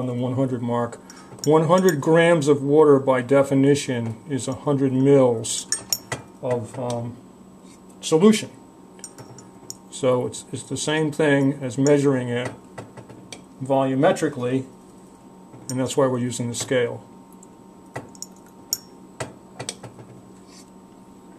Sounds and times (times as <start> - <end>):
Speech: 0.0 - 5.8, 6.4 - 7.2, 8.0 - 8.6, 9.9 - 12.6, 13.6 - 14.7, 15.7 - 17.1.